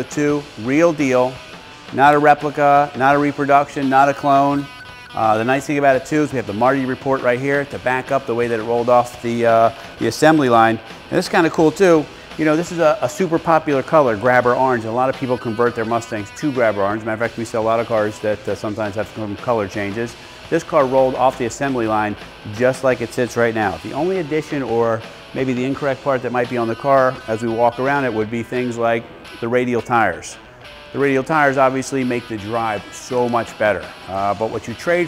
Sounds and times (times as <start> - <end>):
Speech: 0.0 - 30.4, 31.0 - 35.0
Music: 0.0 - 35.0.